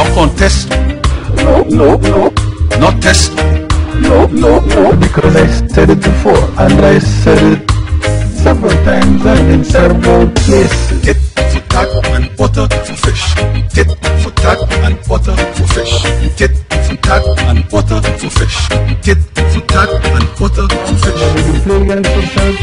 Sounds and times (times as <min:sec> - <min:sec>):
Male singing: 0:00.0 - 0:00.7, 0:01.3 - 0:03.4, 0:04.0 - 0:07.7, 0:08.3 - 0:22.6
Music: 0:00.0 - 0:22.6.